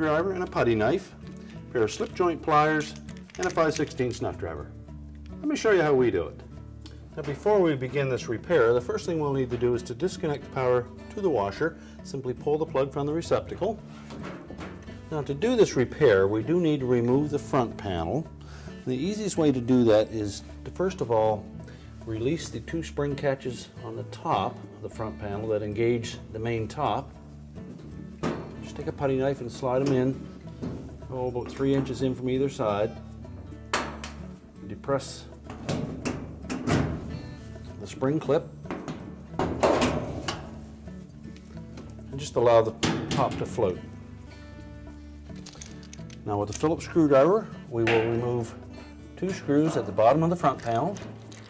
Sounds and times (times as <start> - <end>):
Speech: 0.0 - 4.7, 5.4 - 6.4, 7.2 - 13.8, 15.1 - 18.3, 18.9 - 21.4, 22.1 - 27.1, 28.6 - 30.2, 31.1 - 33.0, 34.6 - 35.3, 37.8 - 38.5, 42.1 - 43.9, 46.2 - 48.6, 49.2 - 51.1
Music: 0.0 - 51.5.